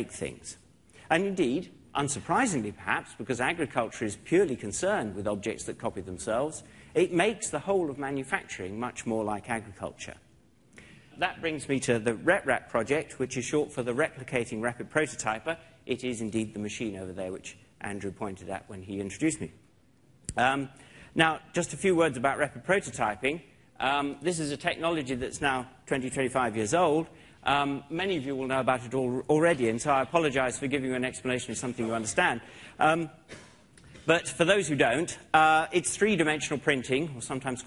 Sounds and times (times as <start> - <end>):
Speech: 0.0 - 10.3, 11.2 - 19.6, 20.3 - 33.2, 34.1 - 37.6.